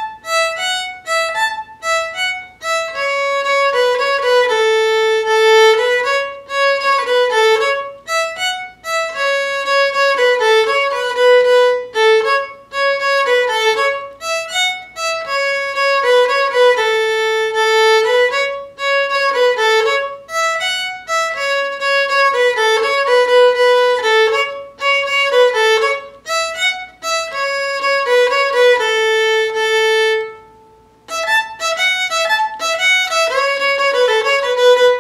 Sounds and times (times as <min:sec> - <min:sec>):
Violin, fiddle: 0:00.0 - 0:35.0.